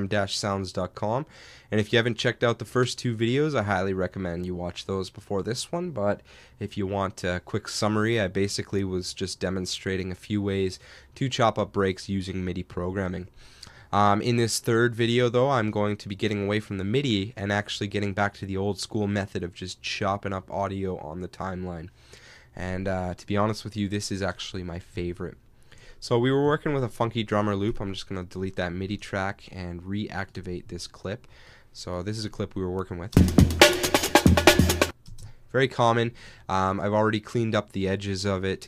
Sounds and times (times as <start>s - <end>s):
Speech: 0.0s - 13.3s, 13.9s - 21.9s, 22.6s - 25.4s, 26.0s - 33.2s, 35.5s - 38.6s.